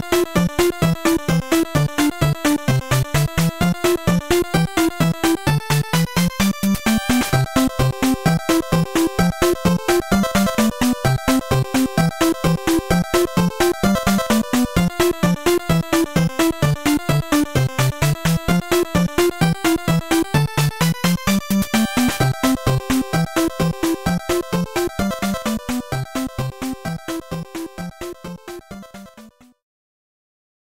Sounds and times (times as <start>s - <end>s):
Video game music: 0.0s - 29.6s.